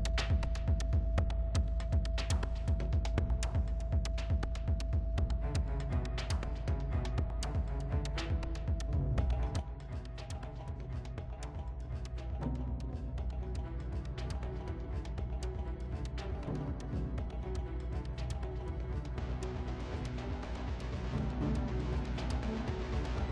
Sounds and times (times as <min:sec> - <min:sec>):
Hum: 0:00.0 - 0:23.3.